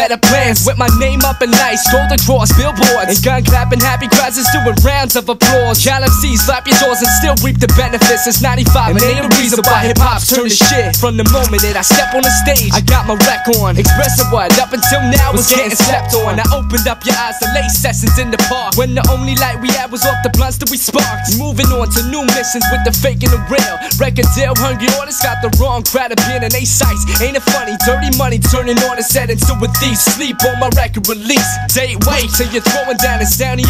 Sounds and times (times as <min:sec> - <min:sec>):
Music: 0:00.0 - 0:33.7.